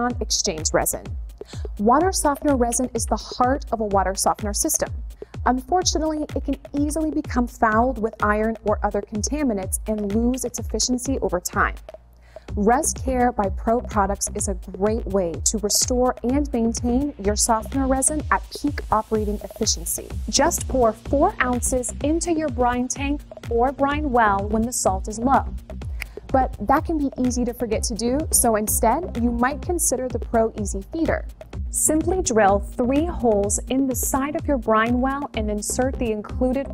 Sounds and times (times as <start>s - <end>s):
Speech: 0.0s - 1.1s, 1.8s - 4.9s, 5.5s - 11.8s, 12.6s - 25.5s, 26.3s - 31.2s, 31.8s - 36.7s
Music: 0.0s - 36.7s.